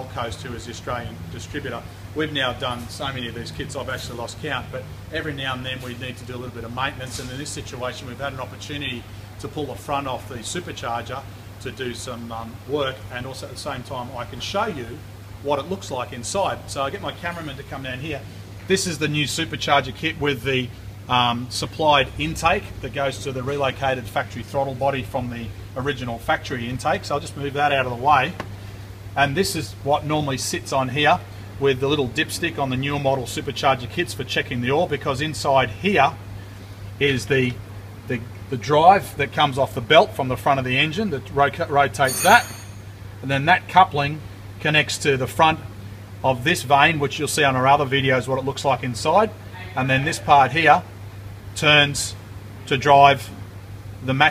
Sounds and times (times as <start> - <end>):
Speech: 0.0 - 28.4, 29.2 - 36.2, 37.0 - 42.6, 43.2 - 50.9, 51.6 - 53.4, 54.0 - 54.3.